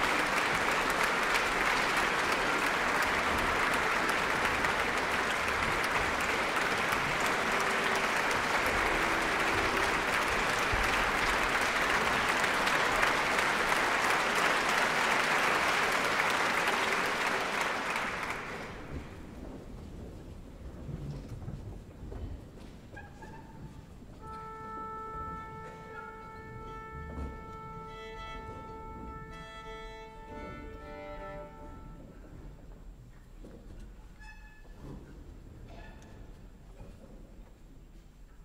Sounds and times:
Violin, fiddle: 24.2 - 32.4.

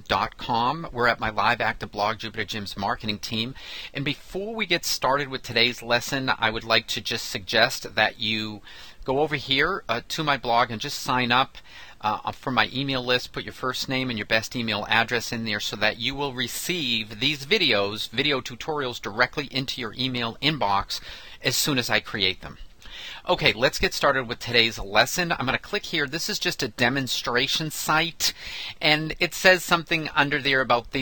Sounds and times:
Speech: 0.0 - 22.6, 23.2 - 31.0.

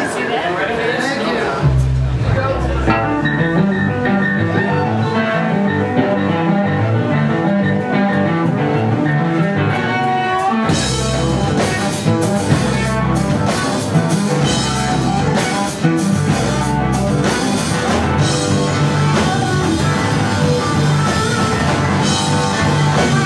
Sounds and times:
Music: 1.6 - 23.2.

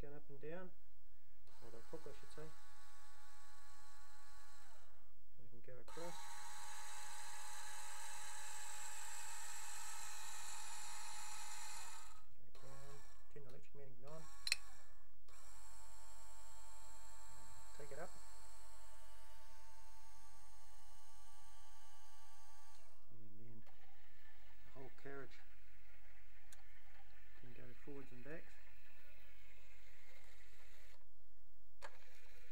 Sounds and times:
Speech: 0.0 - 0.7, 1.6 - 2.5, 5.5 - 6.2, 13.3 - 14.2, 17.8 - 18.1, 24.7 - 25.4, 27.4 - 28.6.

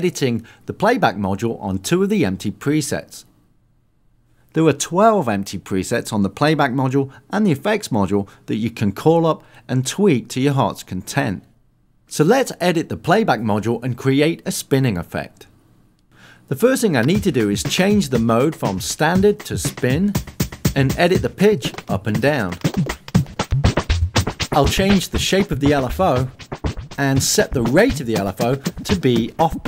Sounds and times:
Speech: 0.0 - 3.3, 4.6 - 11.5, 12.1 - 15.5, 16.5 - 20.2, 20.8 - 22.6, 24.6 - 26.3, 27.0 - 29.6
Scratching (performance technique): 17.0 - 29.6.

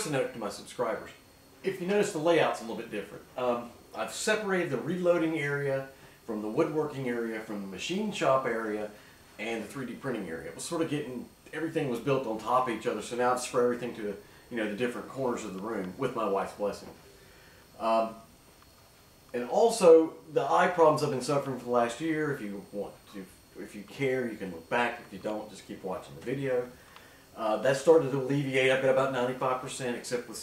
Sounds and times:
Speech: 0.0 - 17.0, 17.8 - 18.3, 19.3 - 26.8, 27.4 - 30.4.

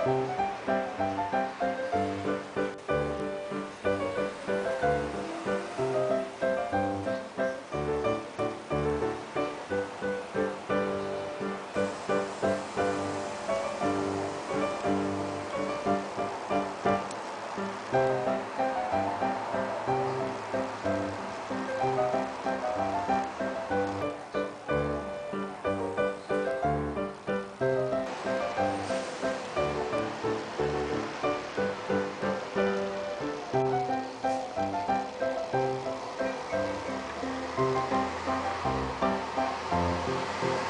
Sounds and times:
Music: 0.0 - 40.6.

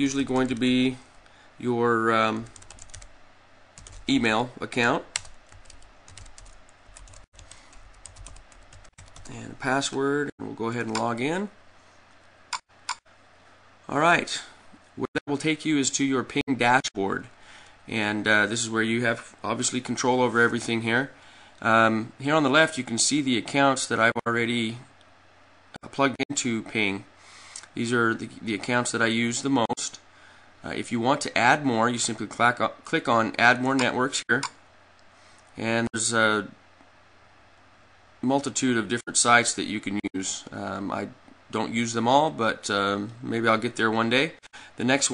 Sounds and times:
Speech: 0.0 - 2.6, 4.1 - 5.2, 9.2 - 11.6, 13.9 - 17.3, 17.9 - 24.9, 25.8 - 27.1, 27.7 - 30.0, 30.6 - 34.6, 35.6 - 36.6, 38.2 - 45.1.

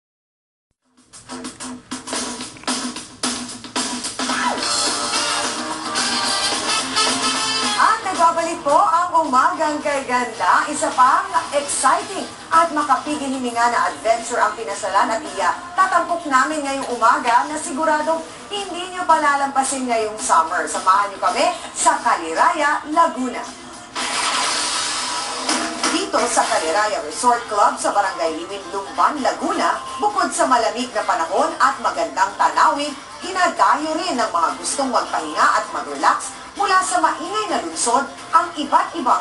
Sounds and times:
Music: 0.8 - 39.2
Speech: 7.8 - 23.6, 25.9 - 39.2.

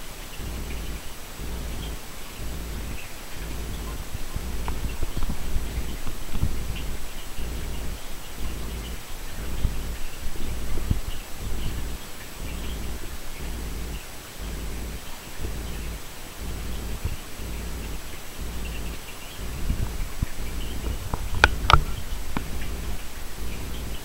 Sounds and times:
Animal: 0.3 - 24.0.

